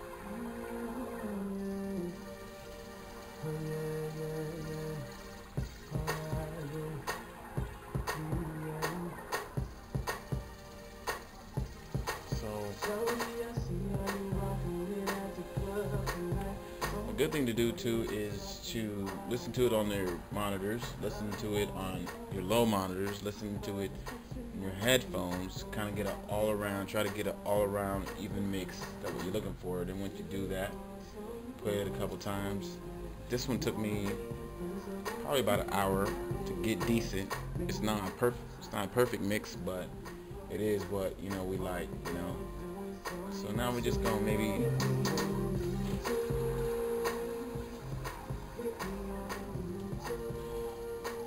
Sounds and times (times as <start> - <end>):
Music: 0.0 - 51.2
Speech: 12.3 - 13.0, 17.0 - 30.8, 31.6 - 34.3, 35.2 - 39.9, 40.5 - 42.5, 43.3 - 45.0.